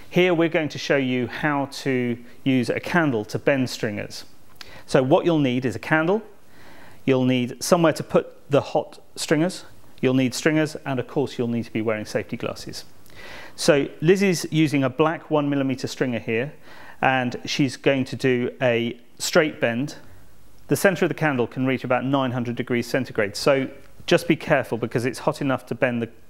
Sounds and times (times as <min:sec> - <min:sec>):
Speech: 0:00.1 - 0:04.3, 0:04.9 - 0:06.4, 0:07.0 - 0:12.9, 0:13.6 - 0:20.1, 0:20.7 - 0:26.2.